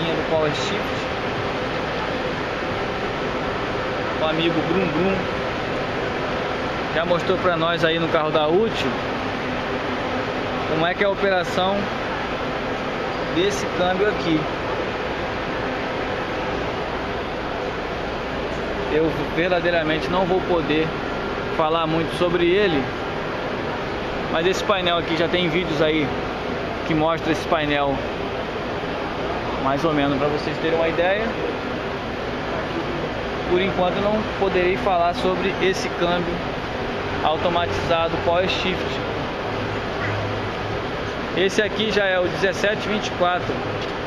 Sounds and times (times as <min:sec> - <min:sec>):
Speech: 0:00.0 - 0:01.1, 0:04.2 - 0:05.3, 0:06.9 - 0:09.0, 0:10.7 - 0:11.9, 0:13.4 - 0:14.5, 0:18.9 - 0:21.0, 0:21.6 - 0:22.9, 0:24.3 - 0:26.1, 0:26.8 - 0:28.0, 0:29.6 - 0:31.4, 0:33.5 - 0:36.4, 0:37.2 - 0:39.1, 0:41.4 - 0:43.7.